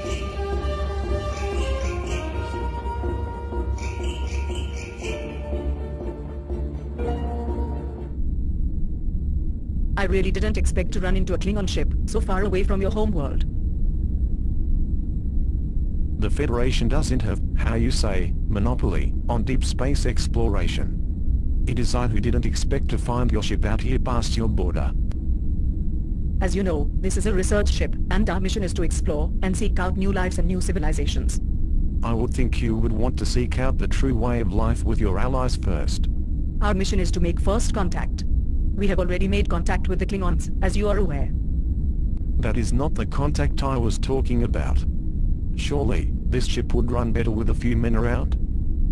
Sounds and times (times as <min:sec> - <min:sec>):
Speech: 0:10.0 - 0:13.5, 0:16.2 - 0:21.0, 0:21.7 - 0:25.0, 0:26.4 - 0:31.4, 0:32.0 - 0:38.2, 0:38.8 - 0:41.3, 0:42.4 - 0:44.9, 0:45.6 - 0:48.4.